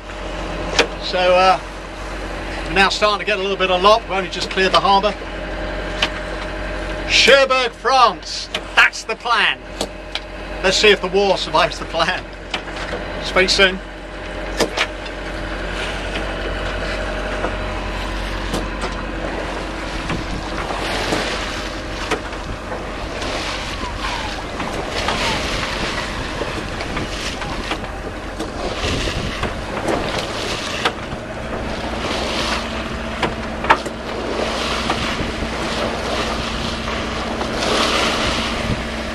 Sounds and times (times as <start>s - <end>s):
Outside, rural or natural: 0.0s - 39.1s
Ship: 0.0s - 39.1s.